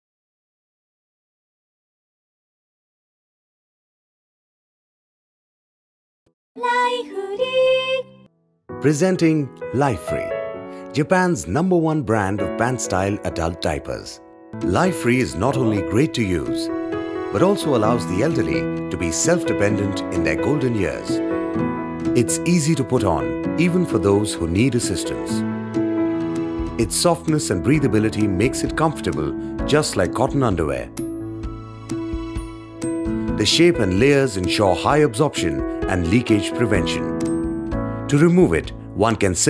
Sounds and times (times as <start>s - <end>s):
Music: 6.6s - 39.5s
Speech: 8.8s - 10.3s, 11.0s - 16.7s, 17.4s - 21.2s, 22.2s - 25.4s, 26.8s - 30.9s, 33.4s - 37.1s, 38.1s - 39.5s.